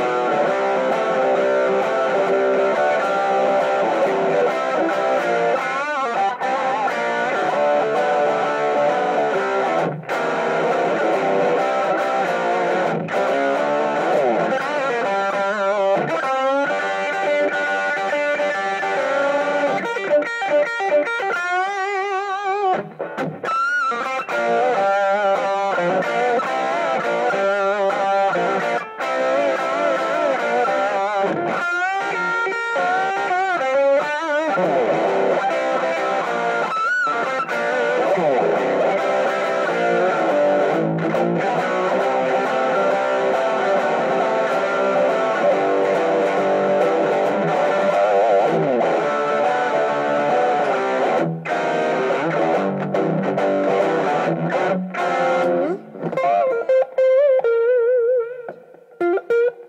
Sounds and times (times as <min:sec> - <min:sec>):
Blues: 0:00.0 - 0:59.6.